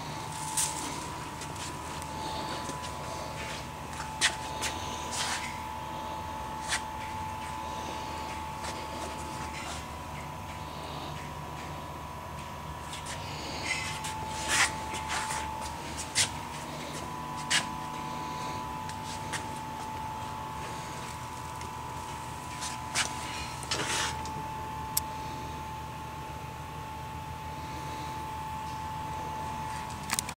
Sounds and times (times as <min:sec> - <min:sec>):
Engine: 0:00.0 - 0:25.8, 0:26.8 - 0:30.3.